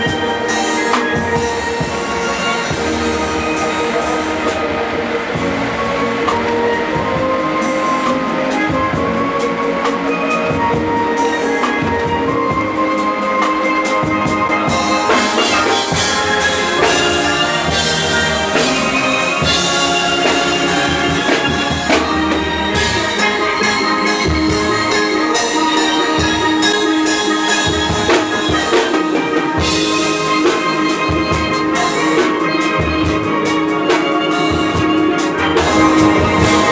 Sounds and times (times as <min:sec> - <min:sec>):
Orchestra: 0:00.0 - 0:36.7.